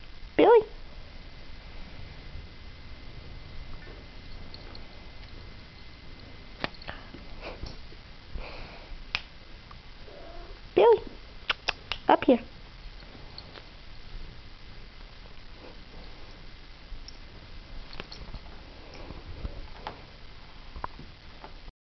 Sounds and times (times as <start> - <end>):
Speech: 0.4 - 0.7, 10.8 - 11.1, 12.1 - 12.5.